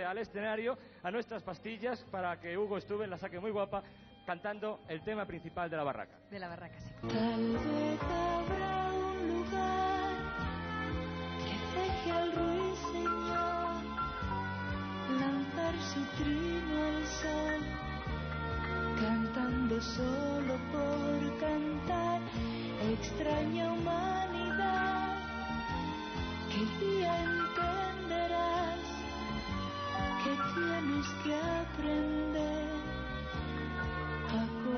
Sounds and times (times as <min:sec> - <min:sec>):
Music: 0:00.0 - 0:34.7.